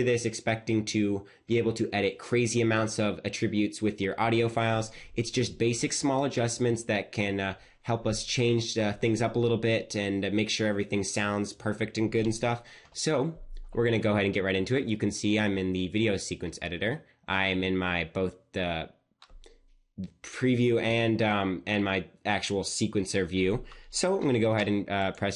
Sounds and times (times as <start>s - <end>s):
Speech: 0.0s - 19.0s, 20.0s - 25.3s.